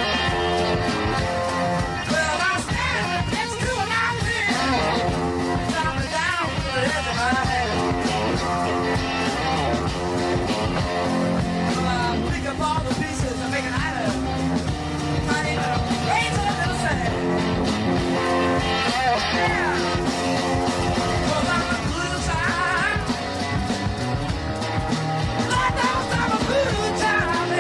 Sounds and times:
Rock and roll: 0:00.0 - 0:27.6.

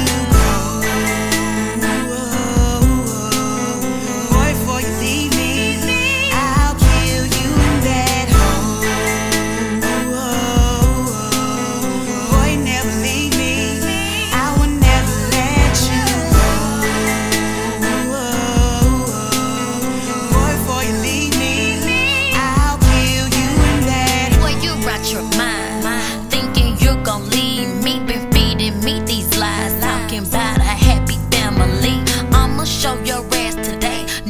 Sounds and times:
Blues: 0:00.0 - 0:34.2.

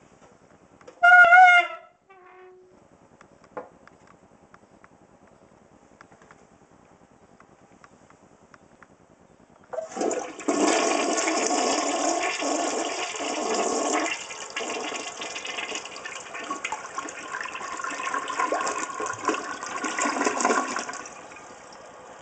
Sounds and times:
Toilet flush: 0:09.8 - 0:22.2
Water: 0:09.8 - 0:22.2.

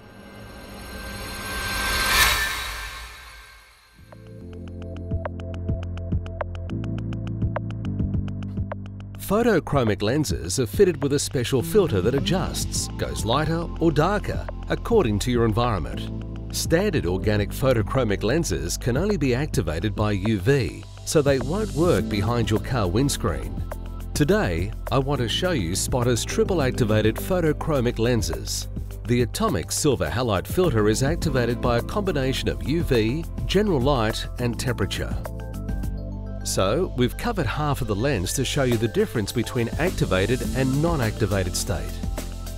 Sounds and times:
Music: 0:00.0 - 0:42.5
Speech: 0:09.2 - 0:23.6, 0:24.2 - 0:35.3, 0:36.4 - 0:42.0.

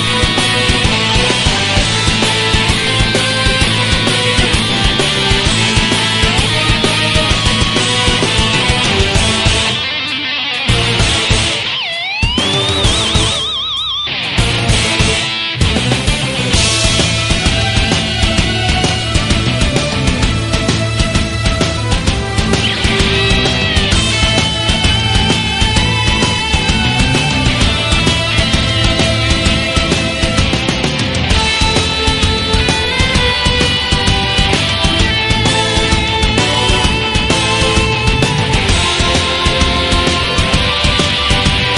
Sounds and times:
Music: 0:00.0 - 0:41.7.

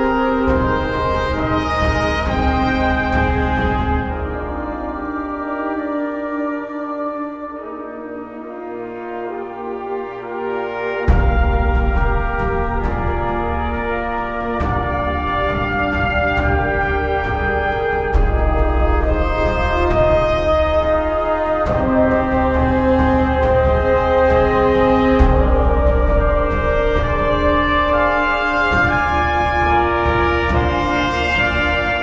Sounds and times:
Music: 0:00.0 - 0:32.0.

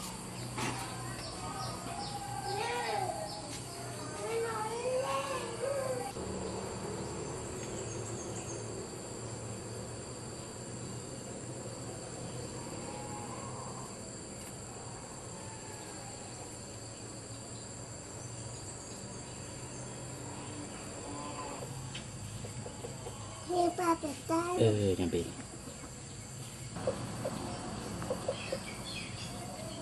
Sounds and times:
Outside, rural or natural: 0:00.0 - 0:29.8
Animal: 0:12.1 - 0:17.0, 0:20.2 - 0:24.0.

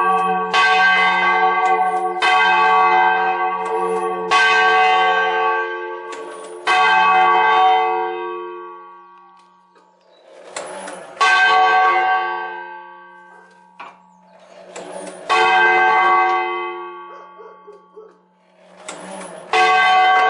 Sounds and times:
Church bell: 0:00.0 - 0:20.3.

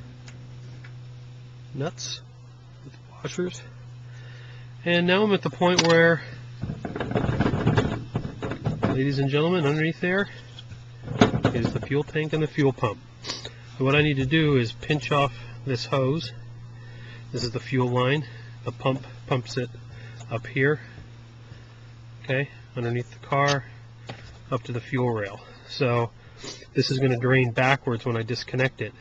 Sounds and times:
Speech: 0:01.7 - 0:02.3, 0:02.9 - 0:03.7, 0:04.8 - 0:06.3, 0:08.9 - 0:10.3, 0:11.5 - 0:13.0, 0:13.8 - 0:16.4, 0:17.3 - 0:19.7, 0:20.3 - 0:20.9, 0:22.2 - 0:23.7, 0:24.5 - 0:26.1, 0:26.8 - 0:28.9.

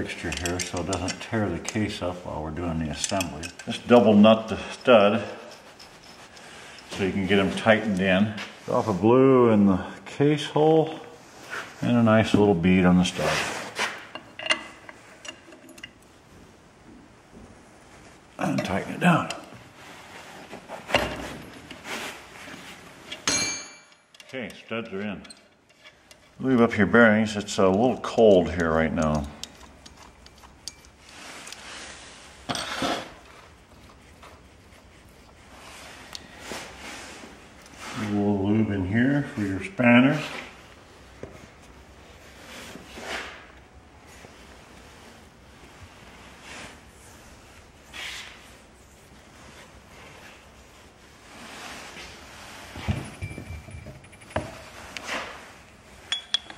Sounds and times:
Speech: 0:00.0 - 0:05.4, 0:07.0 - 0:11.2, 0:11.8 - 0:13.6, 0:18.4 - 0:19.5, 0:24.3 - 0:25.3, 0:26.4 - 0:29.4, 0:37.9 - 0:40.5.

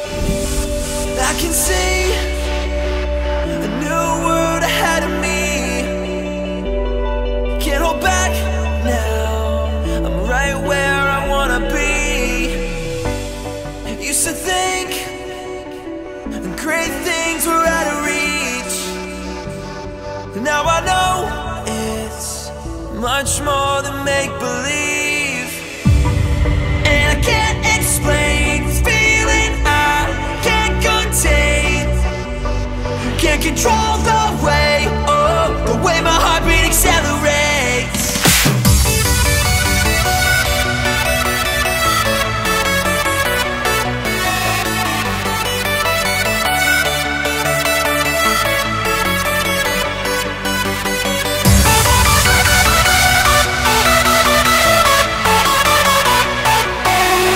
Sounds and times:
Music: 0:00.0 - 0:57.3.

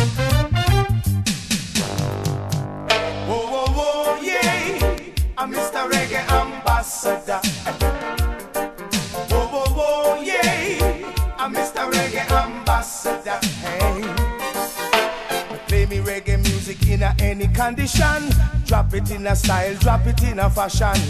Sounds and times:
Reggae: 0:00.0 - 0:21.0.

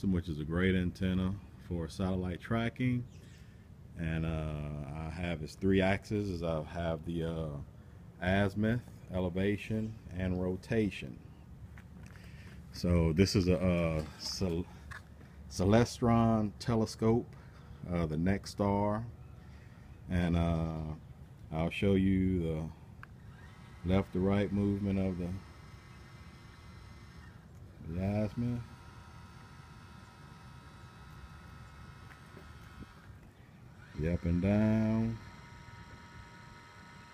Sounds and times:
Speech: 0:00.0 - 0:03.1, 0:04.0 - 0:11.2, 0:12.8 - 0:14.7, 0:15.5 - 0:19.1, 0:20.1 - 0:22.8, 0:23.9 - 0:25.4, 0:27.8 - 0:28.7, 0:34.0 - 0:35.2.

